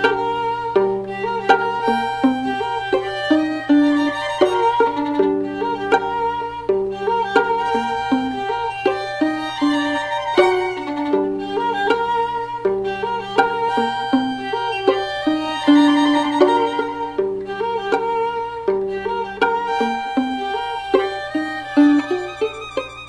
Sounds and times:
Violin, fiddle: 0.0 - 23.0.

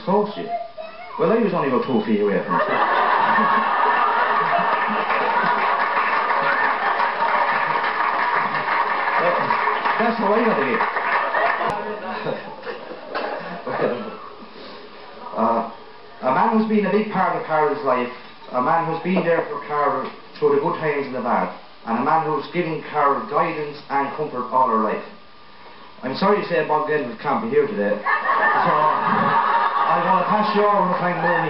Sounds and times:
Male speech, man speaking: 0.0 - 0.6, 1.2 - 2.8, 9.2 - 10.8, 13.6 - 14.2, 15.4 - 25.2, 26.0 - 28.0, 28.6 - 29.0, 29.9 - 31.4
Narration, monologue: 0.0 - 3.6, 9.2 - 10.9, 12.4 - 31.4.

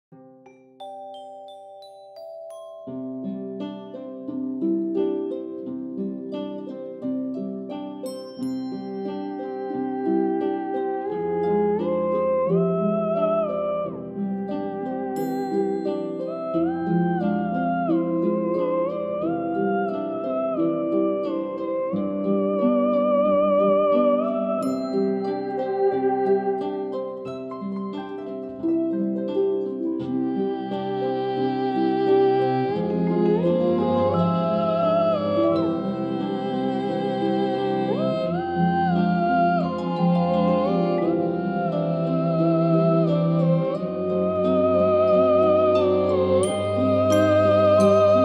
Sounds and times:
Opera: 9.2 - 27.0, 29.5 - 48.2.

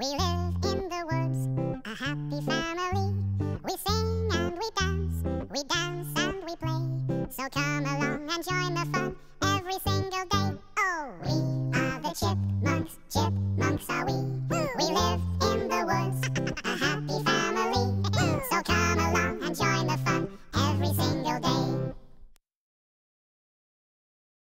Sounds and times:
Music: 0.0 - 22.1.

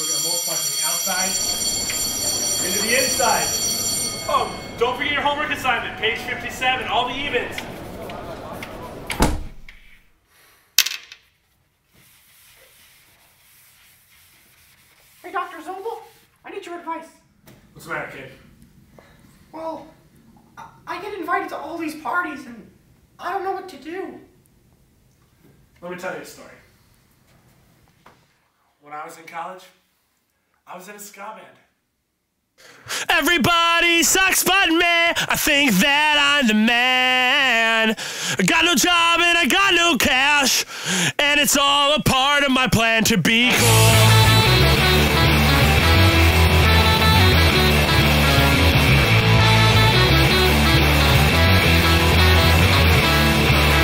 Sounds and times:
Punk rock: 43.4 - 53.8
Song: 43.4 - 53.8
Ska: 43.5 - 53.8.

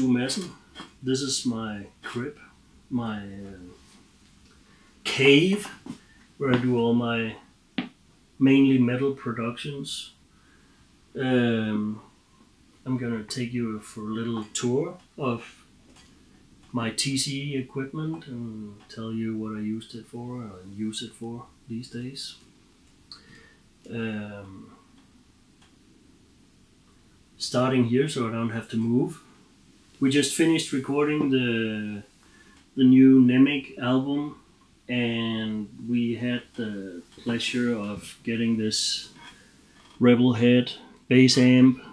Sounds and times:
Speech: 0.0 - 3.8, 5.0 - 7.5, 8.4 - 10.2, 11.2 - 12.1, 12.8 - 15.6, 16.7 - 22.5, 23.8 - 24.8, 27.4 - 29.3, 30.0 - 32.1, 32.8 - 39.2, 40.0 - 41.9.

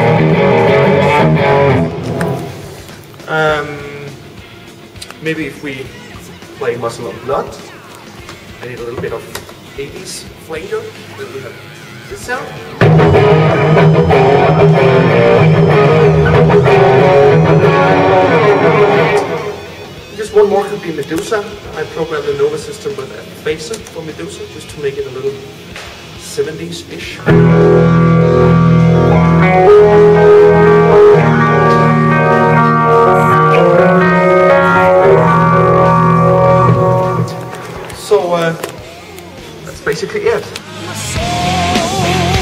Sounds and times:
Guitar: 0.0 - 42.4.

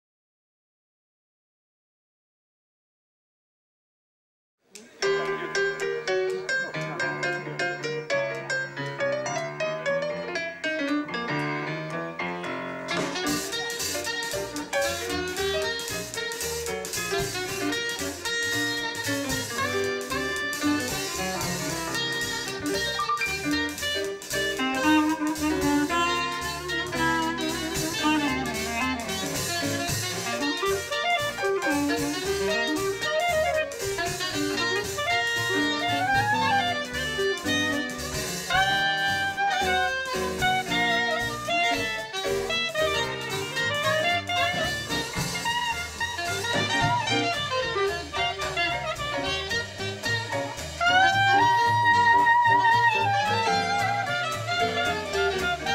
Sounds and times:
Jazz: 4.8 - 55.7
Saxophone: 12.5 - 55.7.

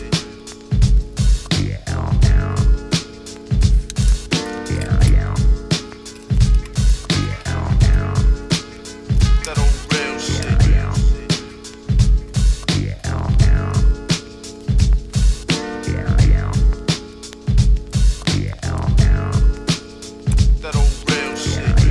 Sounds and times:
Music: 0.0 - 21.9.

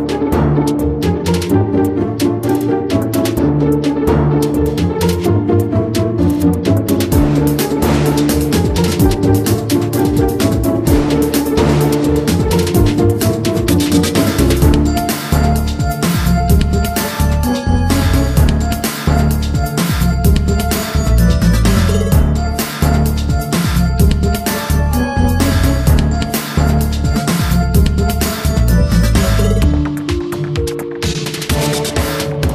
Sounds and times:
Music: 0.0 - 32.5.

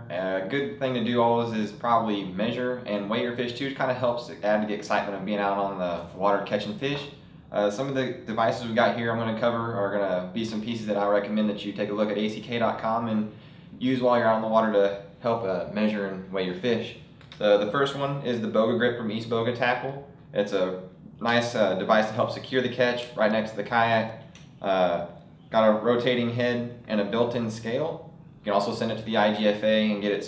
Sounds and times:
Speech: 0.0 - 30.2.

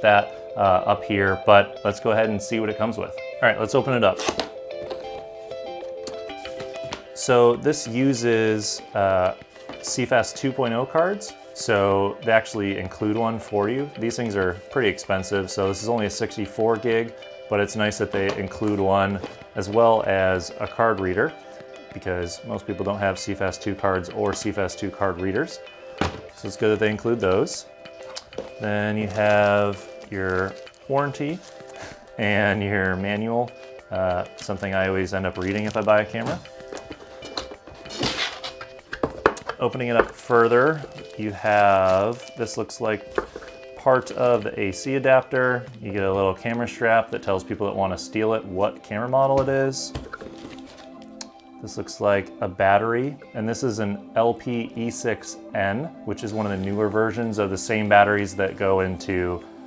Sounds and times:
Speech: 0.0 - 4.2, 32.2 - 36.4, 39.6 - 43.0, 43.8 - 50.0, 51.6 - 59.4
Music: 0.0 - 59.6.

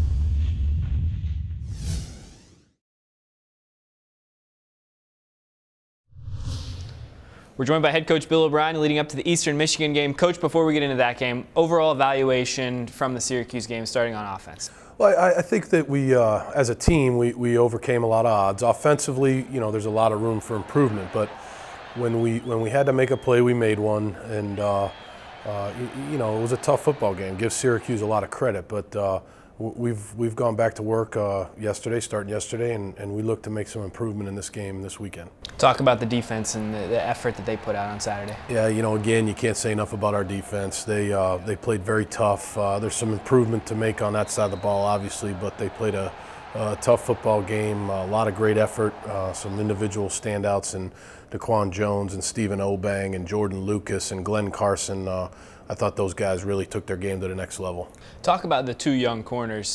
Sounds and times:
Speech: 7.6 - 21.4, 22.0 - 59.7.

